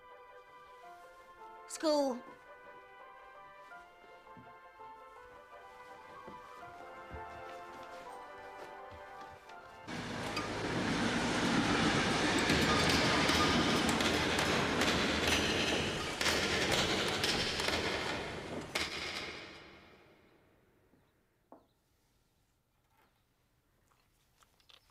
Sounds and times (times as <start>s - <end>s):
Music: 0.0s - 20.2s
Train: 9.8s - 19.8s.